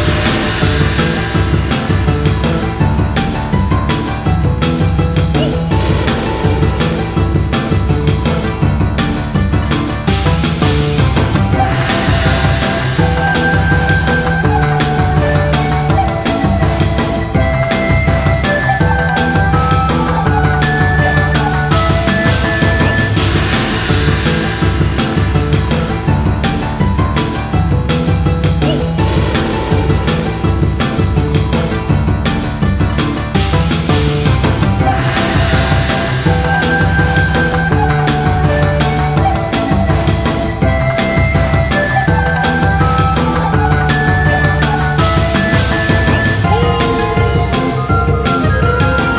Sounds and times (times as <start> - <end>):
Music: 0.0 - 49.1.